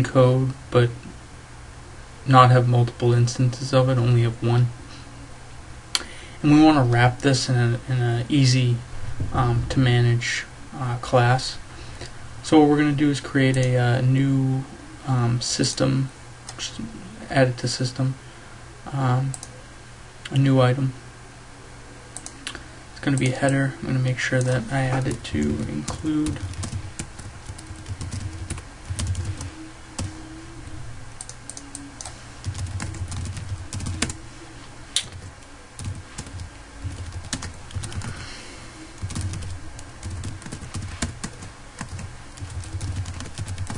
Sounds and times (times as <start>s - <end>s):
Speech: 0.0s - 1.1s, 2.3s - 4.8s, 6.4s - 11.6s, 12.4s - 18.2s, 18.9s - 19.4s, 20.3s - 21.0s, 23.0s - 26.5s.